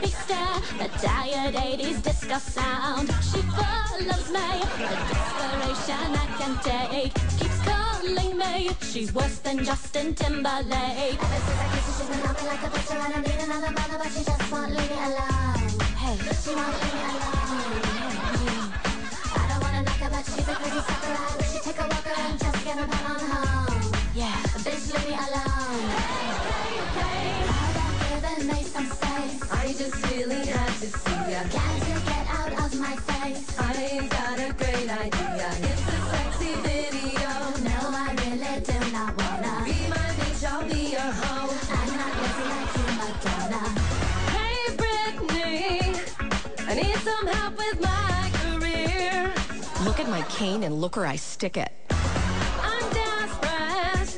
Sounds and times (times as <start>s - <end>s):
Funk: 0.0s - 50.2s, 51.9s - 54.1s
Dance music: 0.0s - 54.1s.